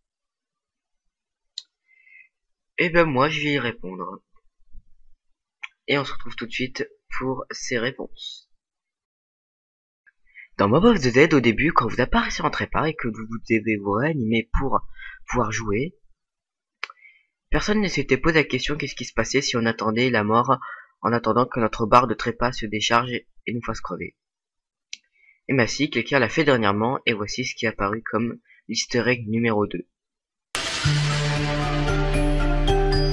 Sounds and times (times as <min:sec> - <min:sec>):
Speech: 0:02.8 - 0:04.2, 0:05.6 - 0:08.6, 0:10.4 - 0:16.0, 0:16.8 - 0:24.2, 0:25.5 - 0:29.9.